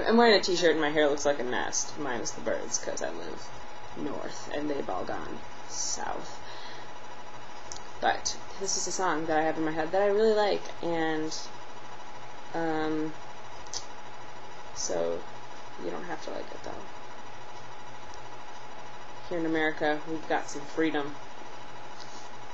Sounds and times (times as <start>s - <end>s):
Speech: 0.0s - 3.4s, 4.0s - 6.3s, 8.0s - 11.5s, 12.6s - 13.2s, 14.8s - 15.2s, 15.8s - 16.9s, 19.2s - 21.2s
Inside, small room: 0.0s - 22.5s.